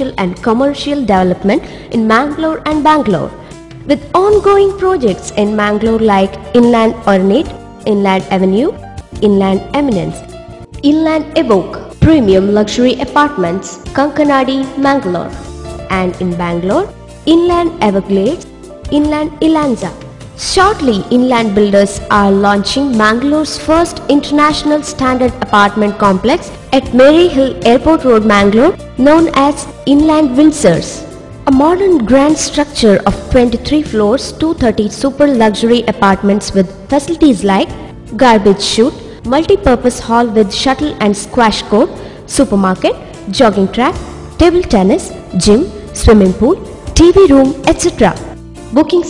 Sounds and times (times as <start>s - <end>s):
Female speech, woman speaking: 0.0s - 3.3s, 3.9s - 10.2s, 10.8s - 49.0s
Music: 0.0s - 49.0s.